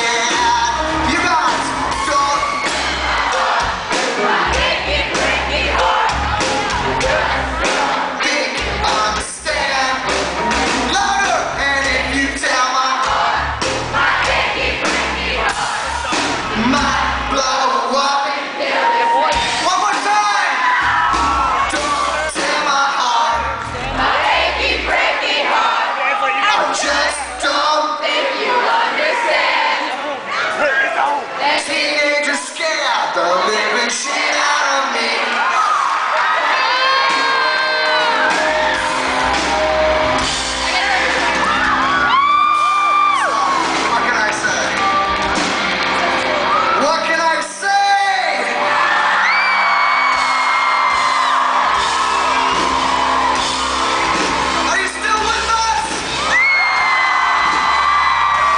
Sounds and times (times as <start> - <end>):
Male singing: 8.2 - 10.0, 21.8 - 23.6, 31.5 - 35.5.